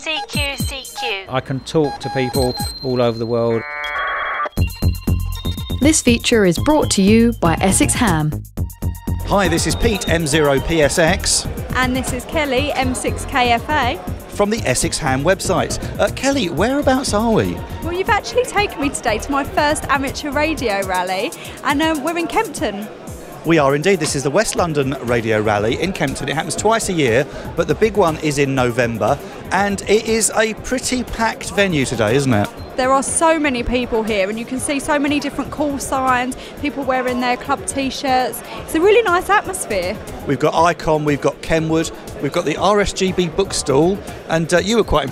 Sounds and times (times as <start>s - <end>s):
Music: 0.0s - 3.6s, 4.4s - 45.1s
Speech: 23.5s - 45.1s.